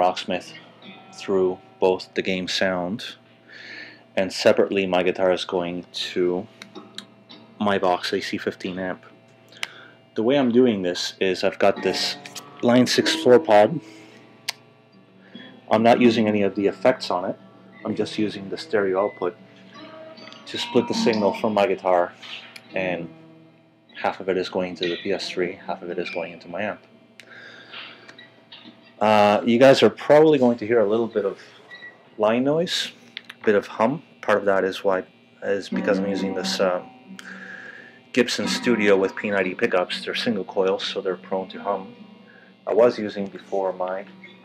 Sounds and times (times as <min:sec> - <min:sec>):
Speech: 0:00.0 - 0:00.6, 0:01.2 - 0:03.2, 0:04.2 - 0:06.5, 0:07.6 - 0:09.1, 0:10.2 - 0:13.8, 0:15.7 - 0:19.4, 0:20.5 - 0:23.1, 0:24.0 - 0:26.8, 0:29.0 - 0:31.4, 0:32.2 - 0:37.4, 0:38.1 - 0:41.9, 0:42.7 - 0:44.1.